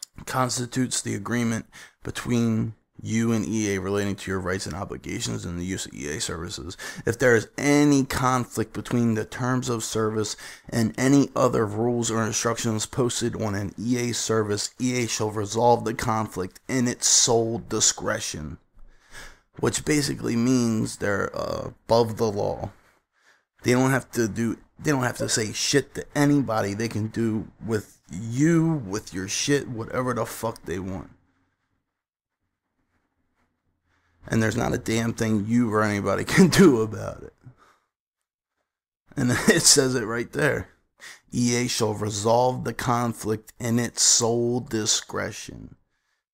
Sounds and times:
Speech: 0.0 - 18.6, 19.6 - 22.8, 23.6 - 31.2, 34.3 - 37.5, 39.2 - 45.8
Inside, small room: 0.0 - 46.3.

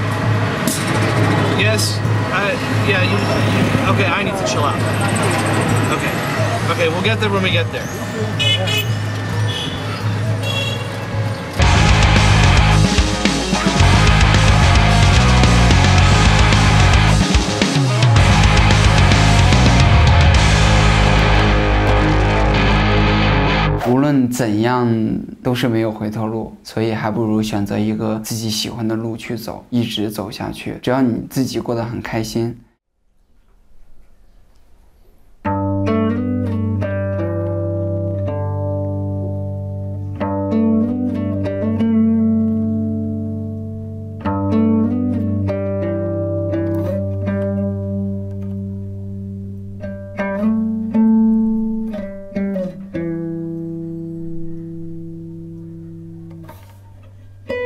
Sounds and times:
Music: 0.0 - 24.5, 35.4 - 57.6
Speech: 1.6 - 8.8, 23.8 - 32.7.

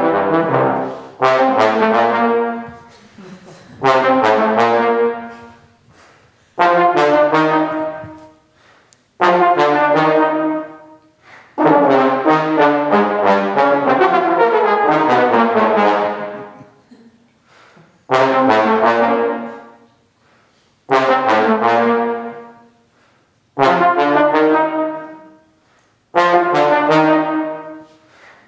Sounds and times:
Trombone: 0.0 - 3.0, 3.7 - 5.8, 6.6 - 8.4, 9.2 - 16.8, 18.1 - 19.9, 20.9 - 22.8, 23.6 - 25.5, 26.1 - 28.2.

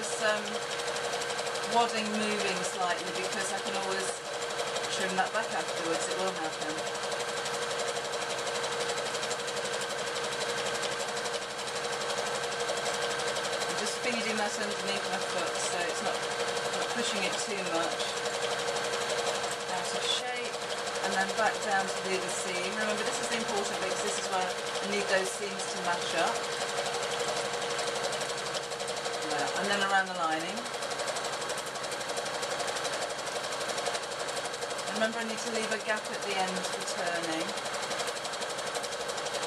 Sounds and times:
Sewing machine: 0.0 - 39.4.

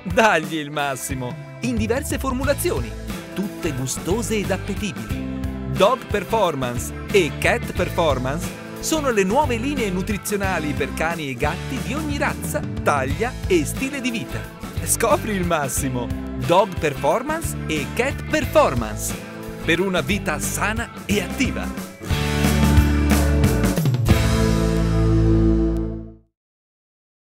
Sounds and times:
Speech: 0.0 - 21.8
Music: 0.0 - 26.3.

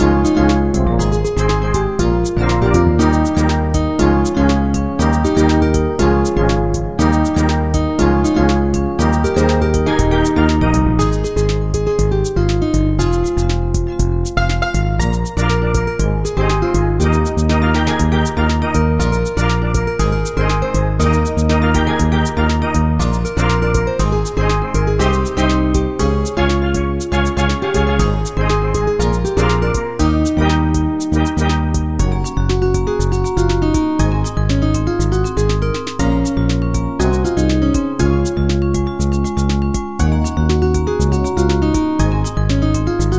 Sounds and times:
Steelpan: 0.0 - 43.1.

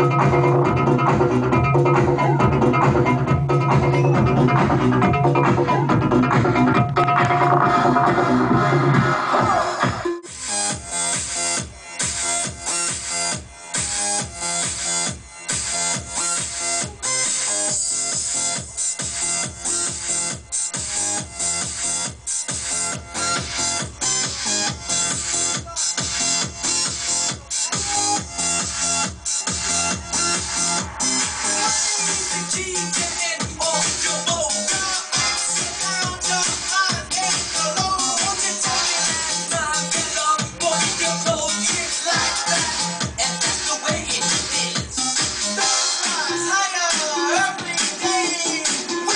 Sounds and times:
Music: 0.0 - 49.1.

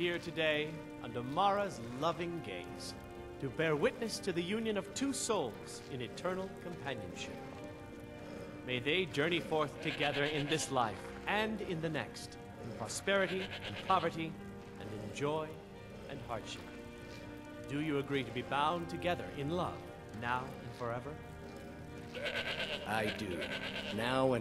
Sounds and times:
Music: 0.0 - 24.4
Sheep: 0.0 - 24.4
Speech: 8.7 - 16.6, 17.7 - 21.2, 22.9 - 24.4.

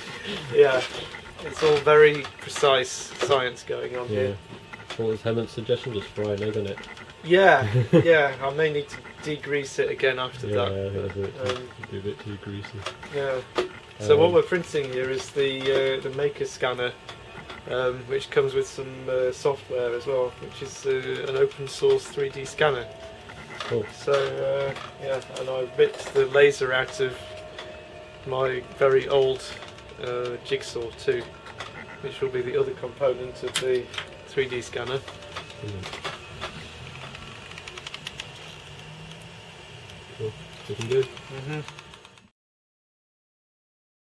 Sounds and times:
Speech: 0.2 - 17.0, 17.7 - 22.9, 23.6 - 27.3, 28.2 - 31.3, 32.0 - 35.0, 35.6 - 35.9, 40.2 - 41.7.

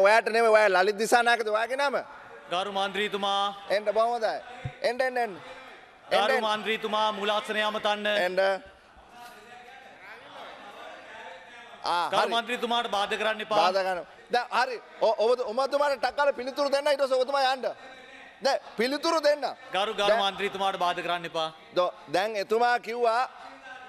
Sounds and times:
Conversation: 0.0 - 23.8
Male speech, man speaking: 0.0 - 23.8.

